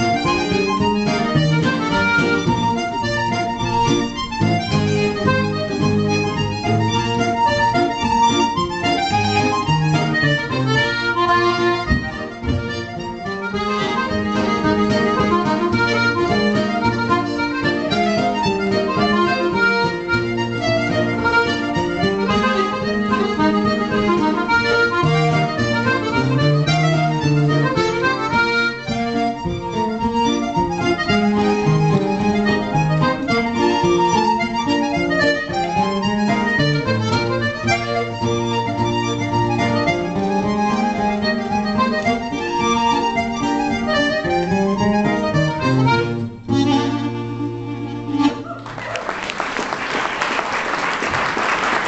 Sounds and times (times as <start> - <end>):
Accordion: 0.0 - 51.8.